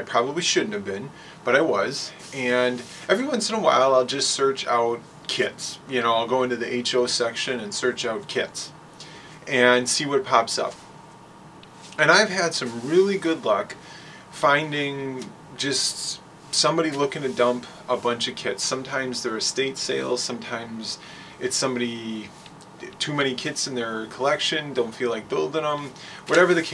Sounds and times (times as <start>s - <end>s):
Speech: 0.0s - 8.8s, 9.4s - 10.8s, 11.9s - 26.7s
Inside, small room: 0.0s - 26.7s.